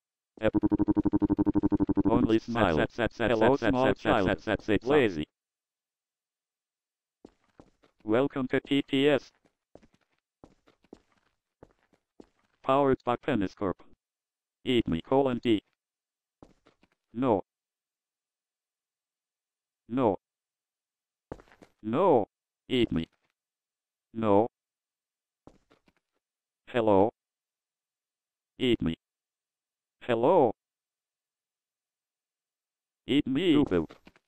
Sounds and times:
Speech synthesizer: 1.9 - 5.3, 8.1 - 9.3, 12.7 - 13.9, 14.7 - 15.6, 17.2 - 17.4, 19.9 - 20.2, 21.9 - 23.1, 24.2 - 24.5, 26.7 - 27.2, 28.6 - 29.0, 30.0 - 30.6, 33.1 - 33.9.

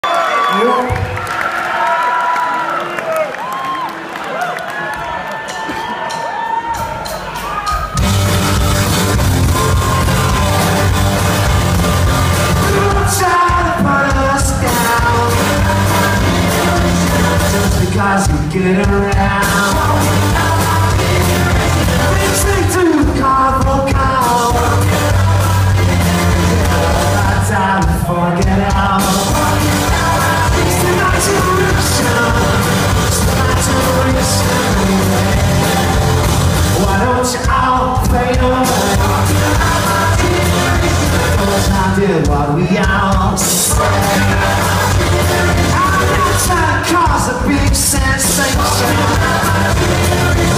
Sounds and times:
Music: 3.7 - 50.5.

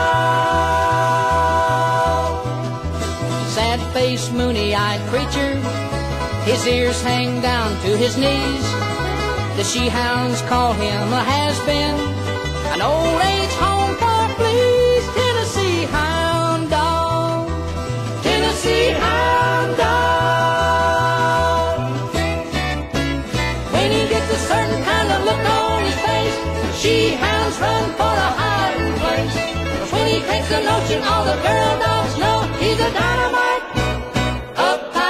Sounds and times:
Bluegrass: 0.0 - 35.1.

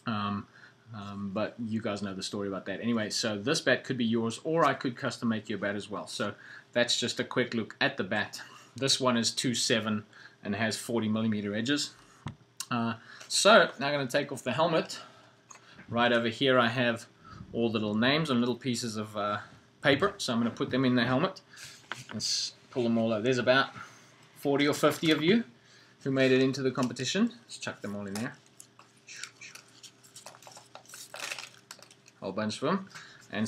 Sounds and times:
Speech: 0.0 - 12.0, 12.6 - 15.1, 15.9 - 21.4, 22.1 - 23.8, 24.4 - 28.4, 32.2 - 33.4.

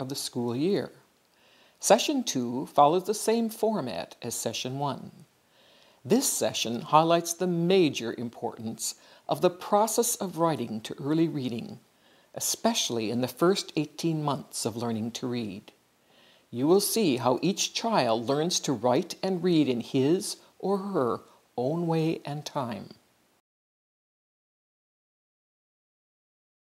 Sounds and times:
Speech: 0.0 - 1.0, 1.8 - 5.3, 6.1 - 11.8, 12.4 - 15.8, 16.5 - 23.0.

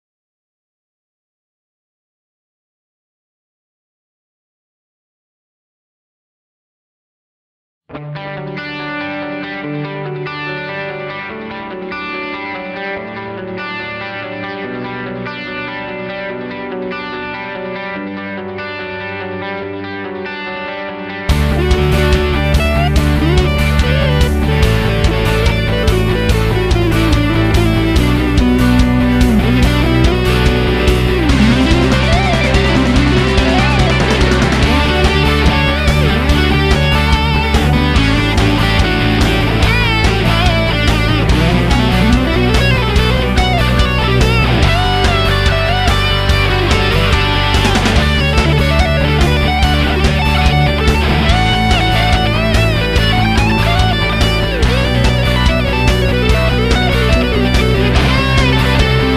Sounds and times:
Electric guitar: 7.9 - 59.1.

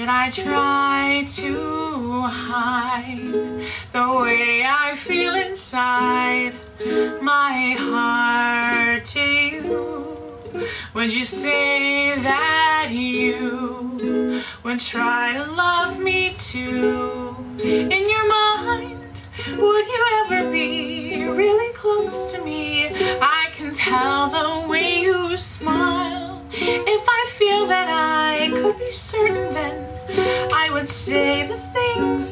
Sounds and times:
Music: 0.0 - 32.3.

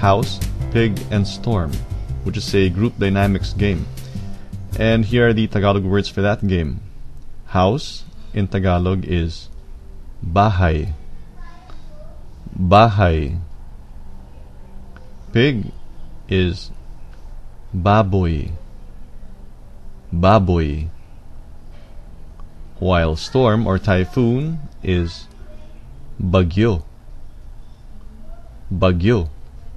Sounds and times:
Speech: 0.0 - 3.9, 4.8 - 6.9, 7.5 - 9.5, 10.2 - 13.5, 14.9 - 16.8, 17.8 - 18.7, 20.1 - 21.0, 22.8 - 26.9, 28.7 - 29.4.

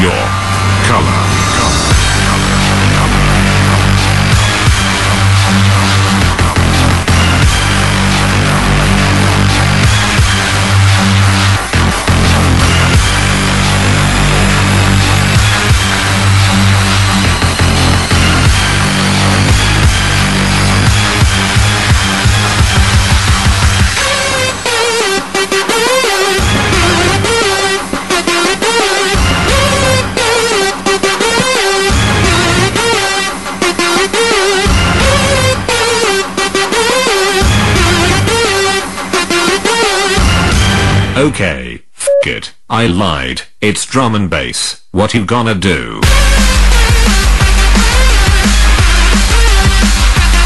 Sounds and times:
Speech: 0.0 - 1.8, 41.2 - 46.1
Music: 0.0 - 41.4, 46.0 - 50.4.

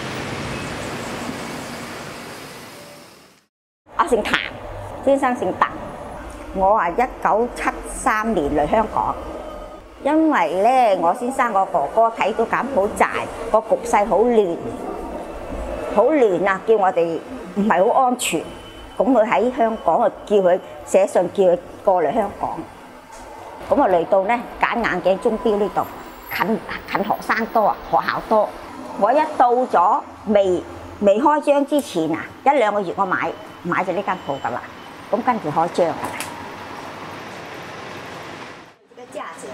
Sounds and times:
Speech: 4.0 - 5.8, 6.6 - 9.2, 10.0 - 14.8, 16.0 - 22.7, 23.7 - 36.2, 38.9 - 39.5.

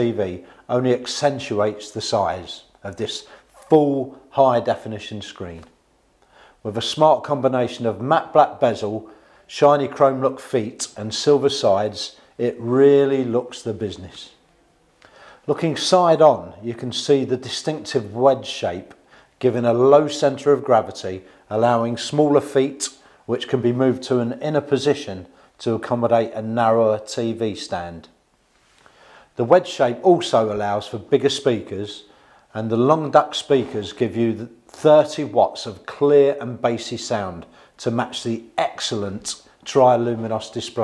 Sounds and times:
Speech: 0.0 - 5.8, 6.6 - 14.4, 15.5 - 28.2, 29.4 - 40.8.

